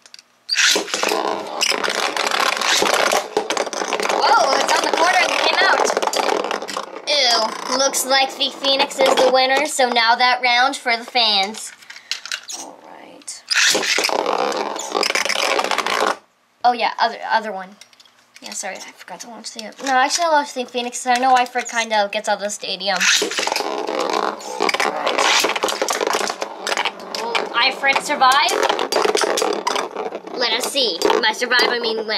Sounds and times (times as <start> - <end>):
Inside, small room: 0.0 - 32.1
Speech: 4.2 - 6.0, 7.1 - 11.7, 12.8 - 13.4, 16.6 - 17.8, 18.4 - 23.1, 24.4 - 25.4, 27.2 - 28.6, 30.4 - 32.1.